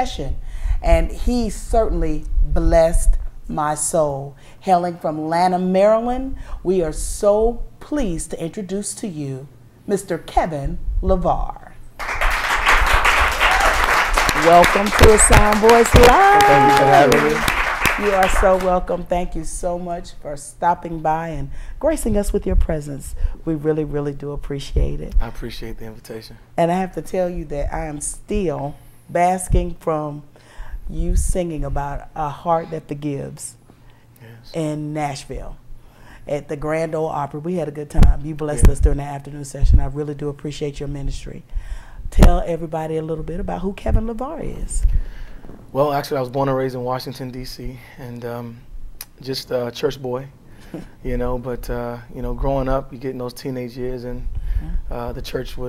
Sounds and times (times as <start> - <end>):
Inside, small room: 0.0 - 55.6
Speech: 14.4 - 17.4, 24.6 - 26.4.